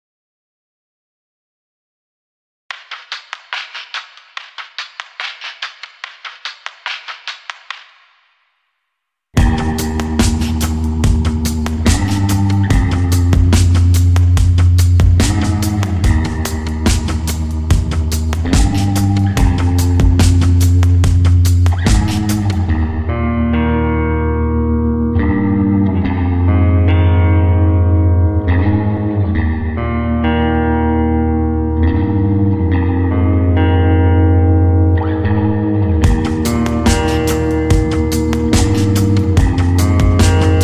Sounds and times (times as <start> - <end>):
Music: 2.7 - 8.1, 9.4 - 40.6.